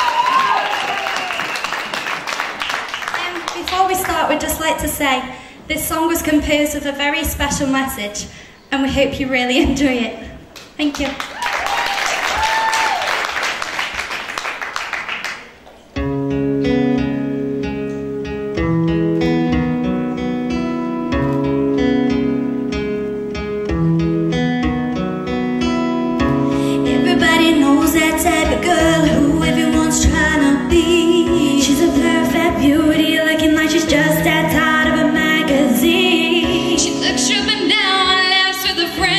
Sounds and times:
Music: 0:16.0 - 0:39.1
Female singing: 0:26.9 - 0:39.1.

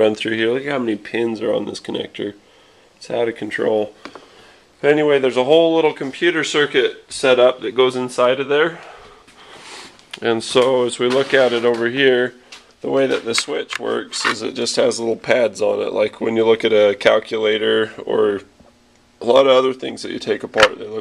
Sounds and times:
Speech: 0:00.0 - 0:02.4, 0:03.0 - 0:04.0, 0:04.8 - 0:09.0, 0:10.2 - 0:18.5, 0:19.2 - 0:21.0.

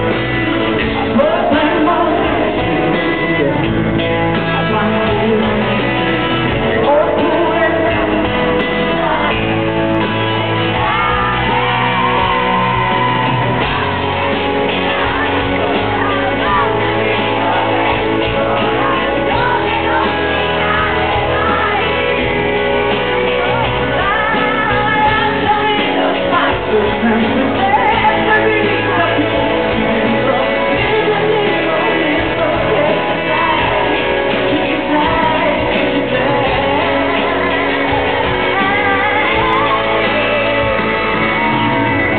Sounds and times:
Music: 0:00.0 - 0:42.1.

